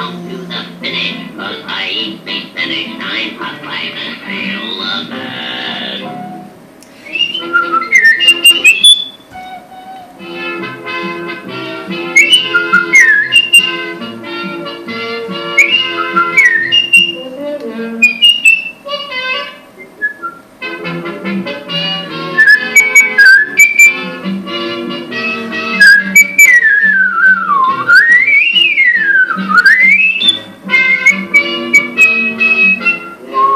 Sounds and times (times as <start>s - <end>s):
Whistle: 6.0s - 10.1s, 12.1s - 13.8s, 15.6s - 17.2s, 18.0s - 18.9s, 19.8s - 20.5s, 22.4s - 24.1s, 25.8s - 33.5s.